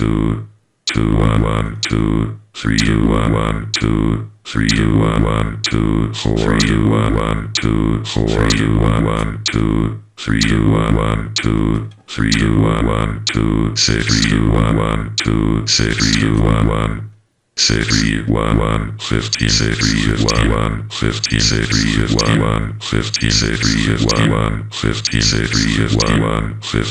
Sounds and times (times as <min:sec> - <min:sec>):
Sampler: 0:00.9 - 0:17.0, 0:17.6 - 0:26.9.